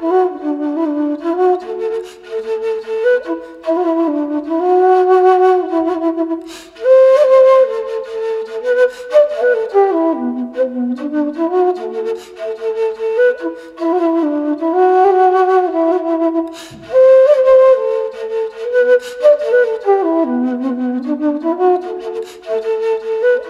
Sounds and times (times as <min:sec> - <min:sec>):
Flute: 0:00.0 - 0:23.5.